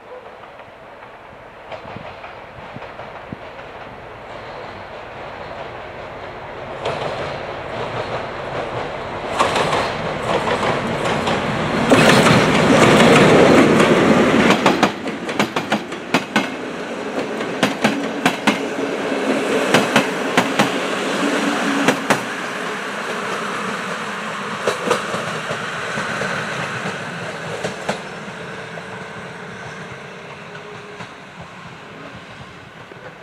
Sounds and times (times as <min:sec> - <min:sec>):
Railroad car, train wagon: 0:00.0 - 0:33.2
Train: 0:00.0 - 0:33.2.